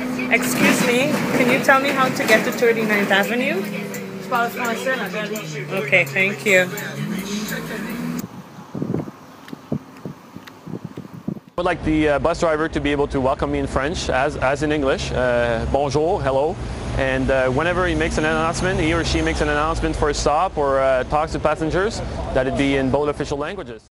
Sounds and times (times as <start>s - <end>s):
Vehicle: 0.0s - 23.8s
Speech: 11.6s - 23.9s.